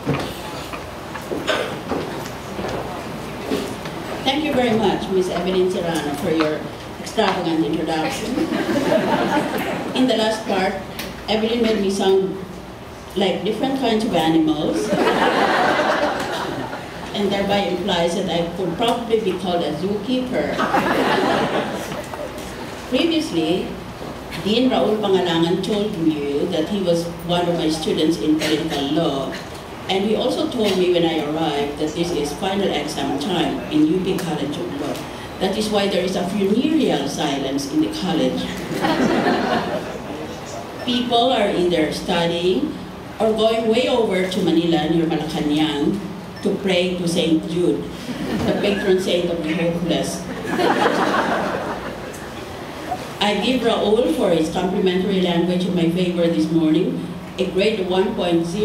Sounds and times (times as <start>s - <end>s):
Narration, monologue: 3.7s - 58.6s
Female speech, woman speaking: 4.2s - 8.5s, 9.9s - 12.5s, 13.2s - 15.0s, 17.1s - 20.7s, 22.9s - 23.8s, 24.4s - 38.7s, 40.9s - 50.4s, 53.2s - 58.6s.